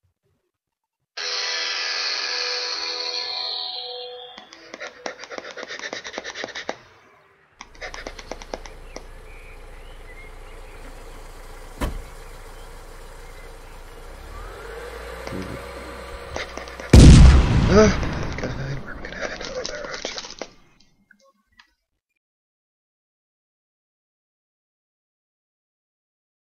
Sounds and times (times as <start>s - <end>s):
Speech: 17.6s - 20.0s.